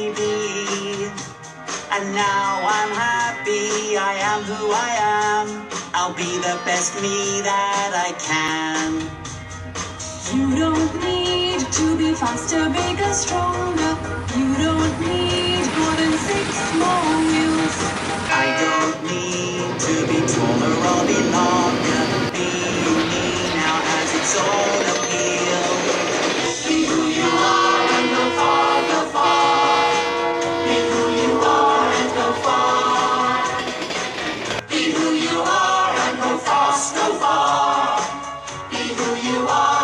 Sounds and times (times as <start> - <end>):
Music: 0.0 - 39.8.